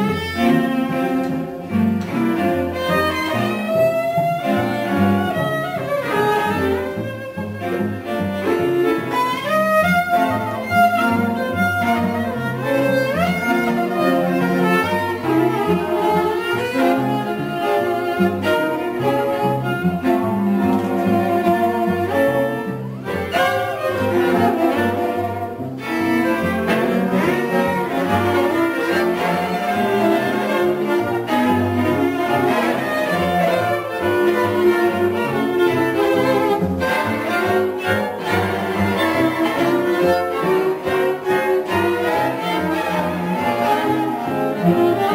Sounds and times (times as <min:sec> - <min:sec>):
Cello: 0:00.0 - 0:45.1.